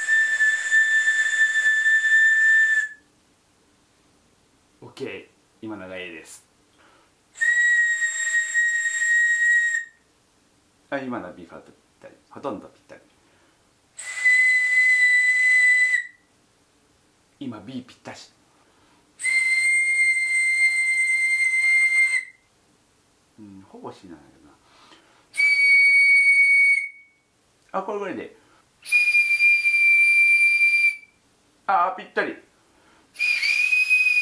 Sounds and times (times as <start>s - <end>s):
Whistle: 0.0s - 3.1s, 7.4s - 10.0s, 14.0s - 16.3s, 19.2s - 22.5s, 25.4s - 27.3s, 28.8s - 31.2s, 33.2s - 34.2s.